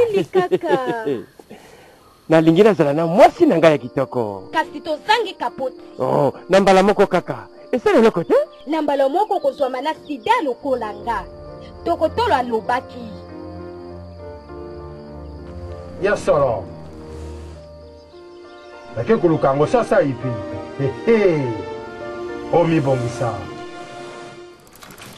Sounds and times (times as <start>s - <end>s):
Music: 2.4s - 24.9s.